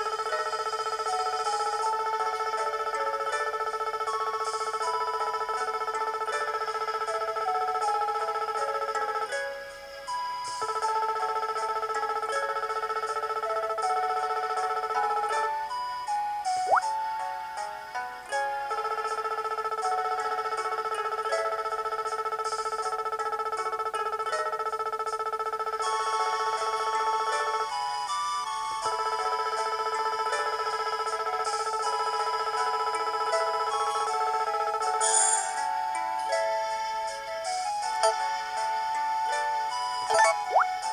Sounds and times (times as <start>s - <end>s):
Music: 0.0s - 40.9s.